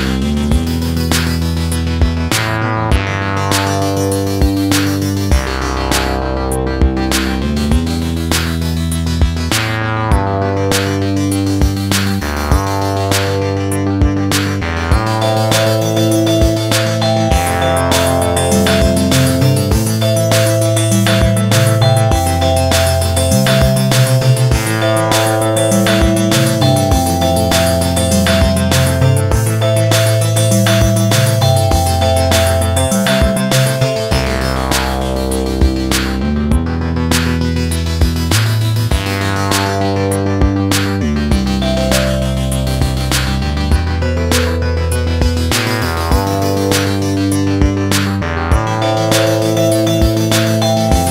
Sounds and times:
Music: 0.0s - 51.1s.

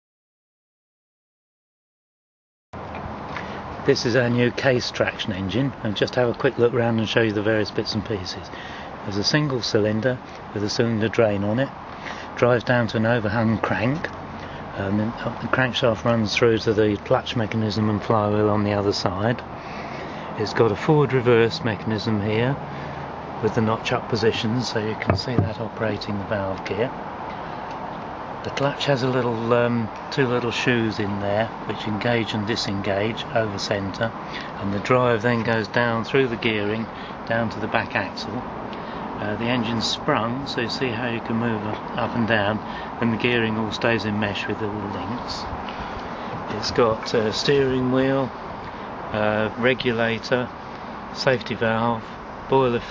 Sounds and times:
Speech: 3.8s - 11.8s, 12.4s - 14.1s, 14.7s - 19.5s, 20.4s - 22.6s, 23.4s - 27.0s, 28.4s - 38.5s, 39.2s - 45.6s, 46.5s - 48.4s, 49.1s - 50.5s, 51.2s - 52.9s.

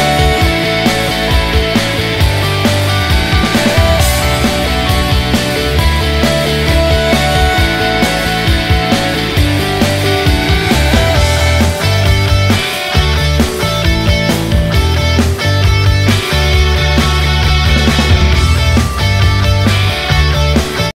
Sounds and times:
Music: 0.0s - 20.9s.

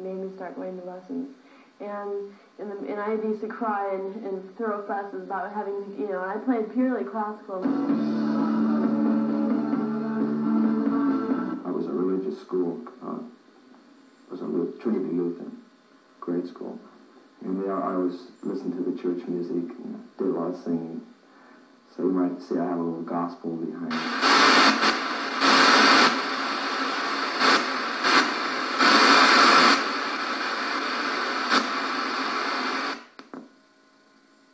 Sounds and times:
Speech: 0.0s - 7.7s, 11.6s - 13.3s, 14.3s - 15.6s, 16.2s - 16.8s, 17.4s - 21.1s, 21.9s - 23.9s.

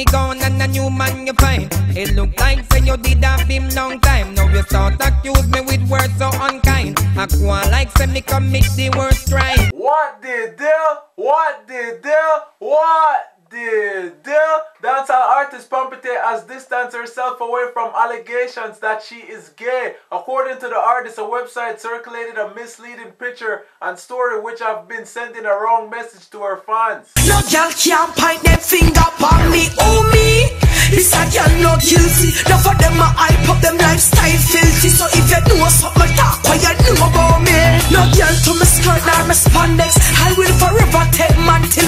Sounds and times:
Music: 0.0s - 9.7s, 27.2s - 41.8s
Speech: 9.6s - 27.1s.

